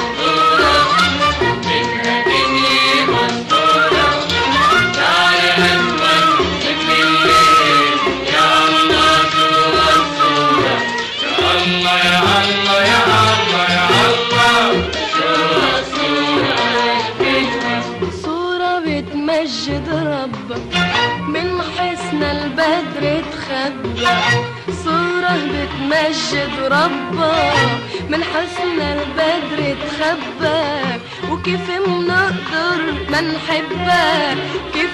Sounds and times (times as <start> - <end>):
Music: 0.0 - 34.9.